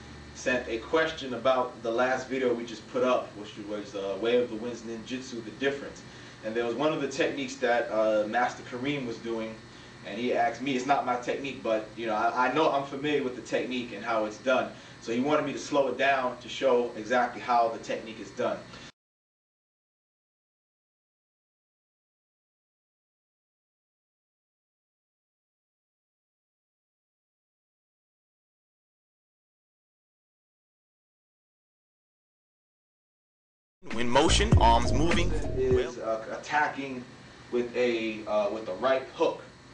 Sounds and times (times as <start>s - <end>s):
Speech: 0.4s - 18.7s, 33.8s - 39.5s.